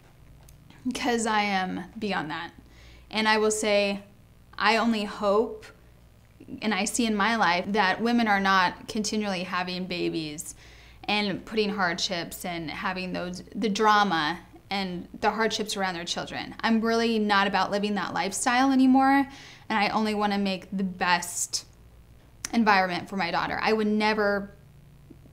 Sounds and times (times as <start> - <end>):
Female speech, woman speaking: 0.8 - 5.8, 6.4 - 21.7, 22.5 - 24.6.